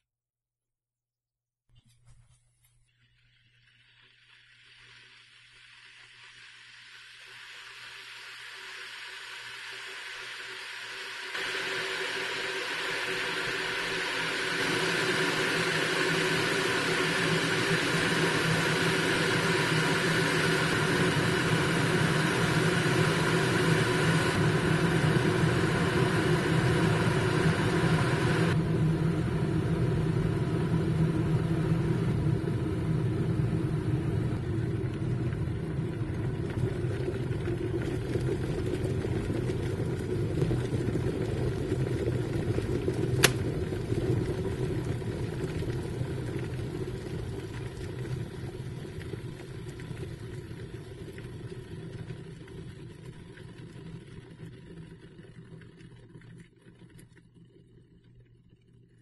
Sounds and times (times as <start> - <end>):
Water: 1.8 - 28.8, 34.3 - 59.0.